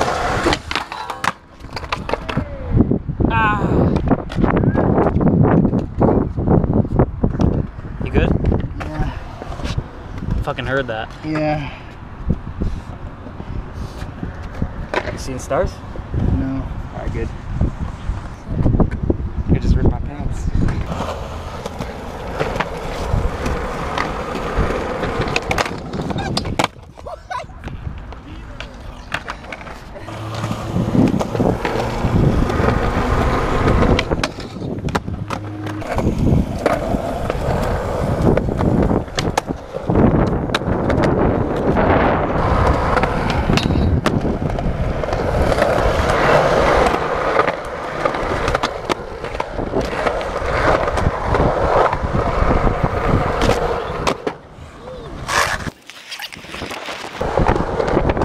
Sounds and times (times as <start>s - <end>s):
Skateboard: 0.0s - 2.9s, 3.6s - 15.5s, 20.3s - 58.2s.